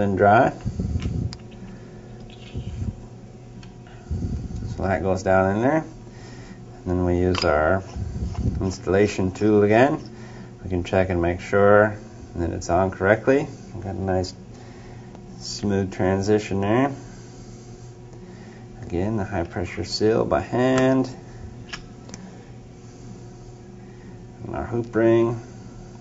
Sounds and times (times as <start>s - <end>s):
Speech: 0.0s - 0.6s, 4.7s - 5.9s, 6.8s - 7.9s, 8.6s - 14.4s, 15.4s - 17.0s, 18.8s - 21.2s, 24.4s - 25.5s.